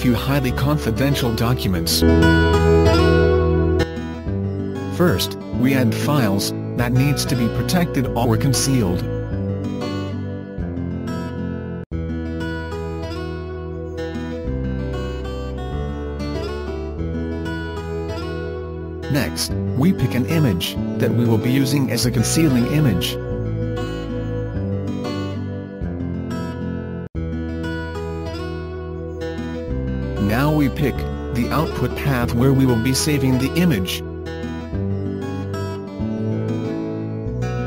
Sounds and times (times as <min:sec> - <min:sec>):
Speech: 0:00.0 - 0:02.1, 0:04.9 - 0:09.1, 0:19.1 - 0:23.2, 0:30.2 - 0:34.0
Music: 0:00.0 - 0:37.6.